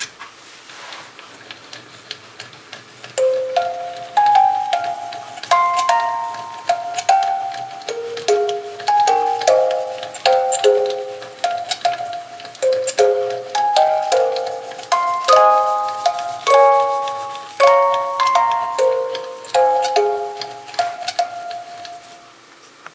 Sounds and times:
Music: 0:03.2 - 0:22.3.

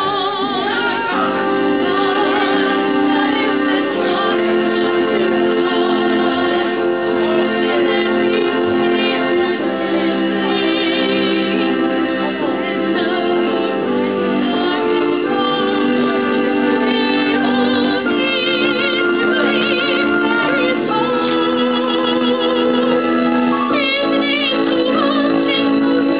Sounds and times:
Music: 0:00.0 - 0:26.1.

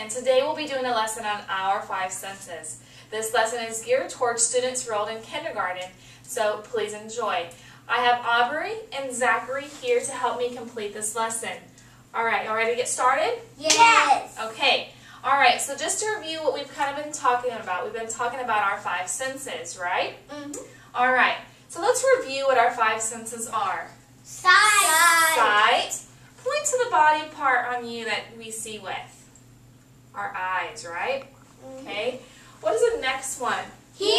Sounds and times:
Inside, small room: 0:00.0 - 0:34.1
Child speech, kid speaking: 0:13.6 - 0:14.4, 0:20.3 - 0:20.7, 0:24.3 - 0:25.6, 0:31.6 - 0:32.2.

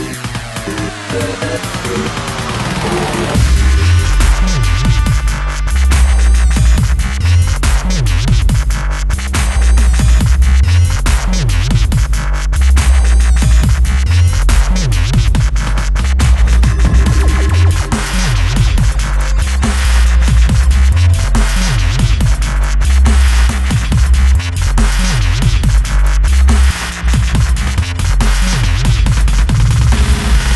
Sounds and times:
Dubstep: 0:00.0 - 0:30.5.

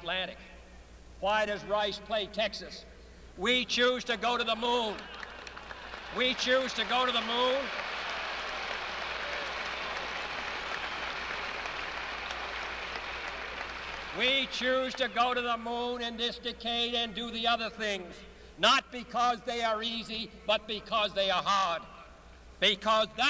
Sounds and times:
Male speech, man speaking: 0:00.0 - 0:00.4, 0:01.2 - 0:05.1, 0:06.1 - 0:07.7, 0:14.2 - 0:22.0, 0:22.6 - 0:23.2
Narration, monologue: 0:00.0 - 0:07.8, 0:14.1 - 0:23.2.

